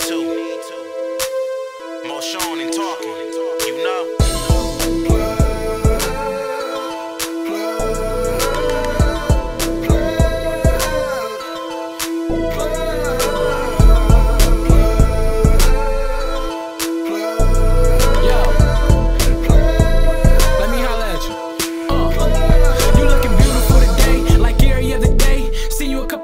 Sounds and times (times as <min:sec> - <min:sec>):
Music: 0:00.0 - 0:26.2.